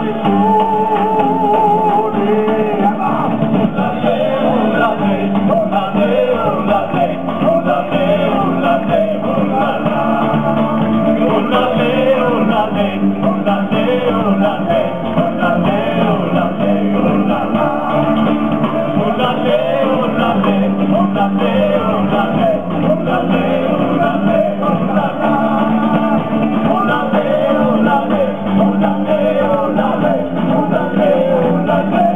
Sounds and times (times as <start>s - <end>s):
Inside, large room or hall: 0.0s - 32.1s
Male singing: 0.0s - 32.1s.